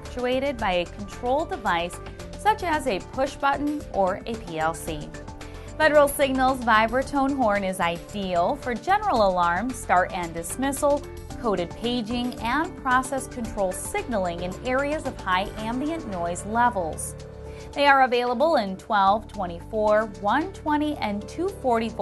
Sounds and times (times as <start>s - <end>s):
Speech: 0.0s - 5.1s, 5.8s - 17.1s, 17.8s - 22.0s
Music: 0.0s - 22.0s.